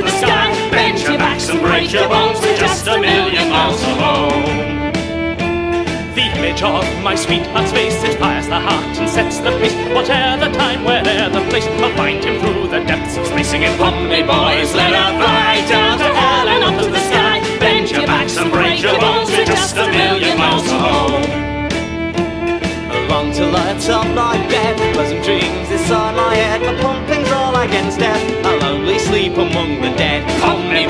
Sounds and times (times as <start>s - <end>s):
Music: 0.0s - 30.9s.